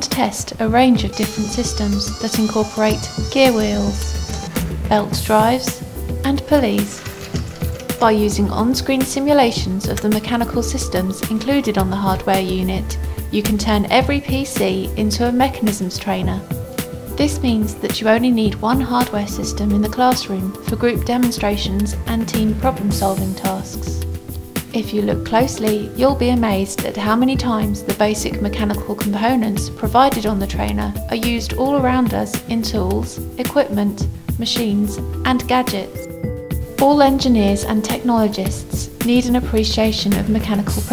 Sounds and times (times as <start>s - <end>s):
Speech: 0.0s - 4.1s, 4.9s - 7.1s, 8.0s - 16.4s, 17.2s - 24.0s, 24.7s - 36.1s, 36.8s - 40.9s
Music: 0.0s - 40.9s.